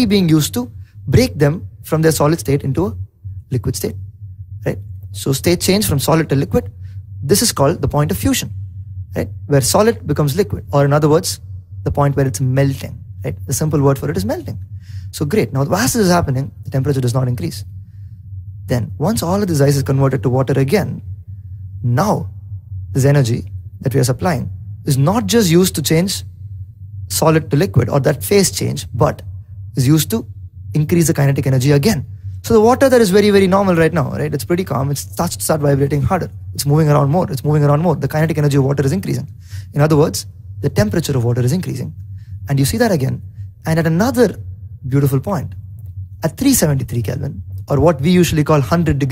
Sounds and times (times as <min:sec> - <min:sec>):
Male speech, man speaking: 0:00.0 - 0:04.0, 0:04.6 - 0:06.7, 0:07.3 - 0:08.6, 0:09.2 - 0:17.7, 0:18.7 - 0:21.0, 0:21.8 - 0:22.3, 0:23.0 - 0:26.3, 0:27.1 - 0:45.6, 0:46.2 - 0:49.1.